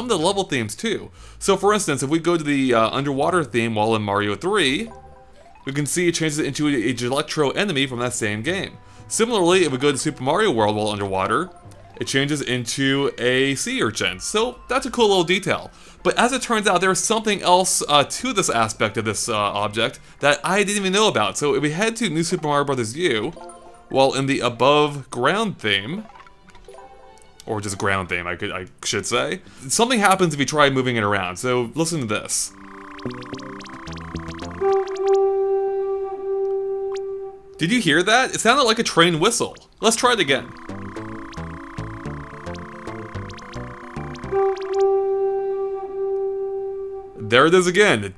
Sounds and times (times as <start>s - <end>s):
Speech: 0.0s - 5.0s, 5.7s - 23.4s, 24.0s - 26.1s, 27.5s - 32.6s, 37.6s - 40.5s, 47.2s - 48.1s
Music: 2.7s - 37.9s, 40.3s - 48.1s.